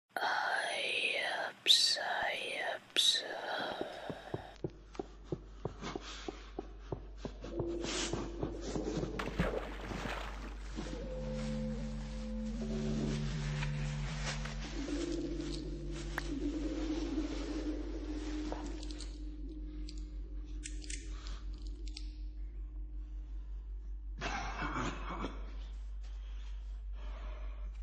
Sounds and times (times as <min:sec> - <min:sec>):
Whispering: 0:00.1 - 0:04.6.